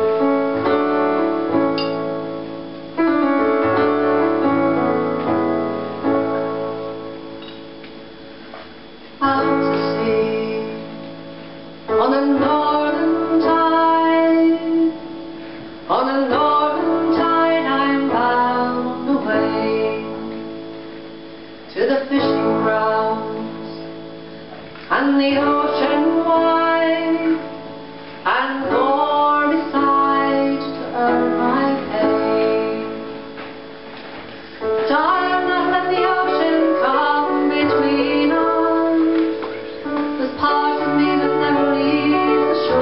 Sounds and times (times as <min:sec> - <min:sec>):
Music: 0:00.0 - 0:42.8.